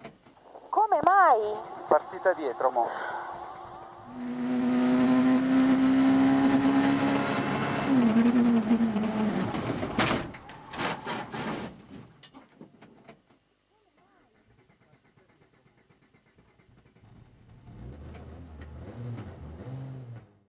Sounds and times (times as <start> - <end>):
Car: 3.6 - 10.6, 16.8 - 20.5.